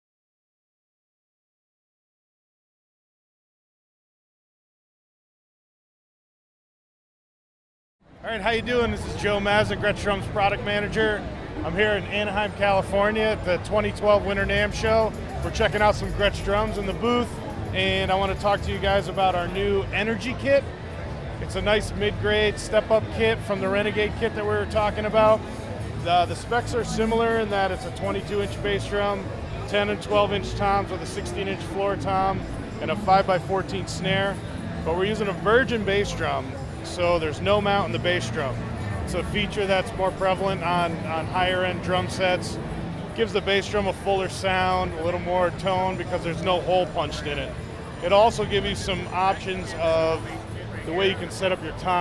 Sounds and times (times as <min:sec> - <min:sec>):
Music: 0:08.1 - 0:52.0
Speech: 0:08.2 - 0:20.8, 0:21.4 - 0:52.0.